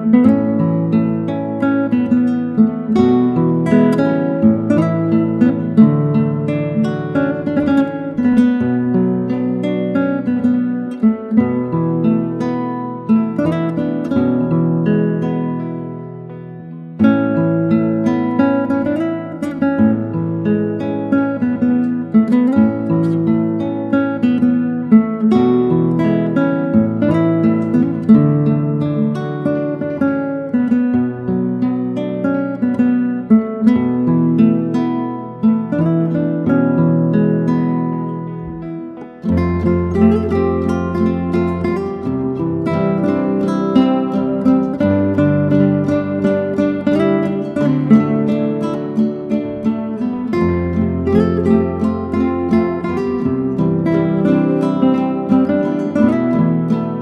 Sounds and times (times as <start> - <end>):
Strum: 0.0 - 57.0.